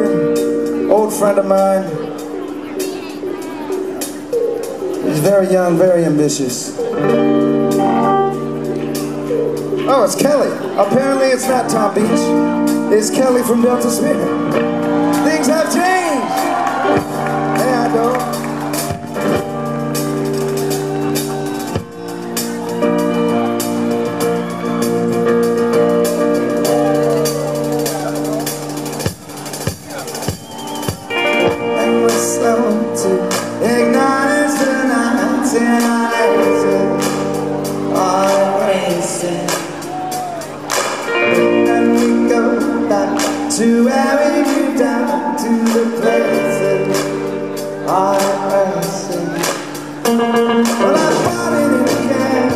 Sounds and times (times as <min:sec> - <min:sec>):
Music: 0:00.0 - 0:52.5.